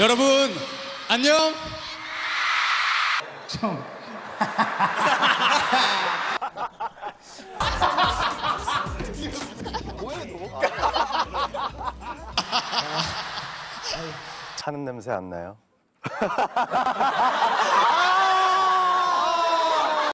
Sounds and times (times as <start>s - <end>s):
Snicker: 4.3s - 9.0s, 9.6s - 13.9s, 16.0s - 18.3s.